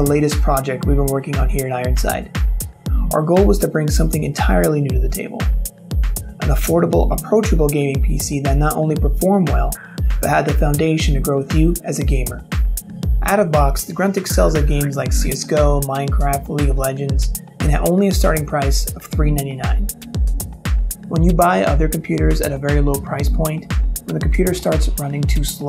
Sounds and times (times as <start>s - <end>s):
Speech: 0.0s - 2.3s, 3.0s - 5.5s, 6.4s - 12.4s, 13.2s - 19.9s, 21.1s - 25.6s
Music: 0.0s - 25.6s.